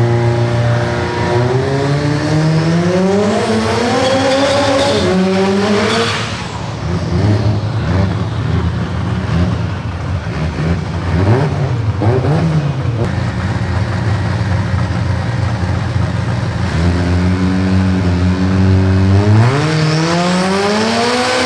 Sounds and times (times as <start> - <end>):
Car: 0.0 - 21.4.